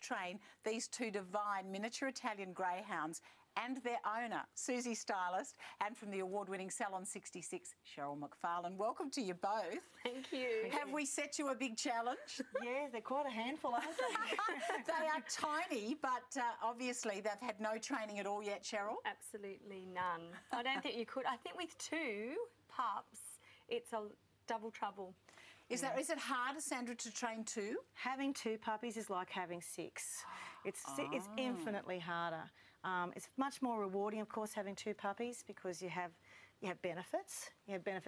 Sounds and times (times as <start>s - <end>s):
Speech: 25.7s - 38.0s.